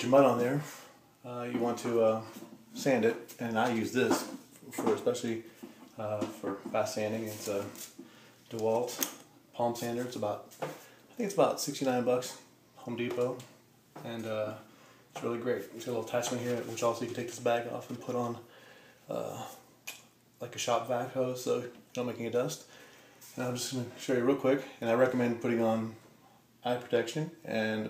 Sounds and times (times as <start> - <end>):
Speech: 0.0 - 7.8, 8.5 - 10.5, 11.2 - 18.5, 19.1 - 19.6, 20.4 - 22.7, 23.4 - 26.0, 26.6 - 27.8.